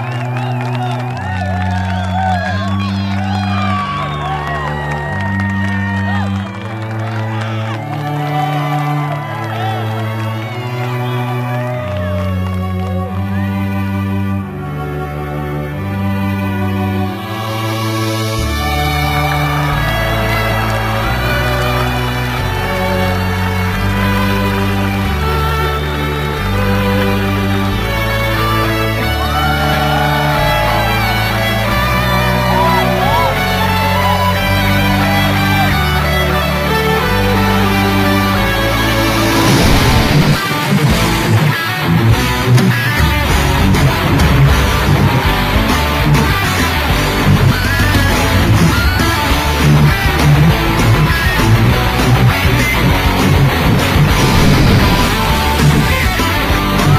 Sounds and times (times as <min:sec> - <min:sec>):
Musical instrument: 0:00.0 - 0:56.9.